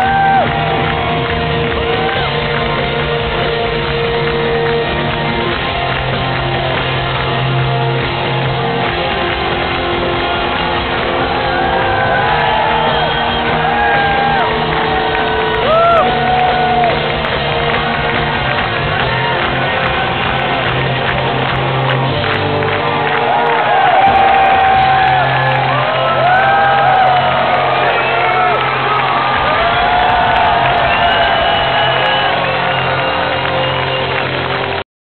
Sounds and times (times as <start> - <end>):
Drum kit: 0.0 - 34.8
Drum: 24.0 - 25.2.